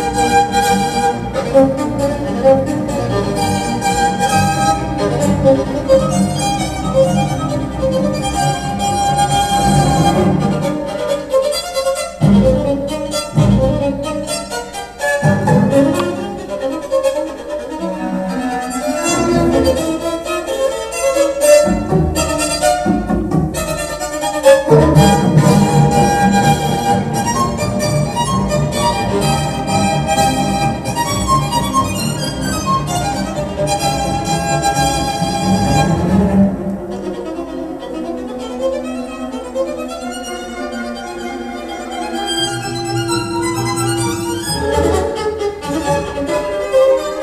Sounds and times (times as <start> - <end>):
Violin, fiddle: 0.0 - 47.2.